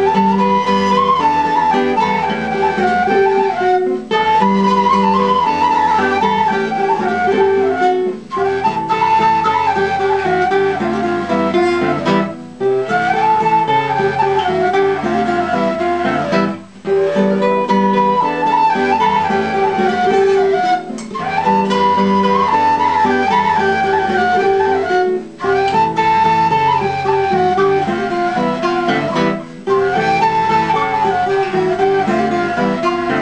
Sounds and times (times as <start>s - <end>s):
Flute: 0.0s - 33.2s.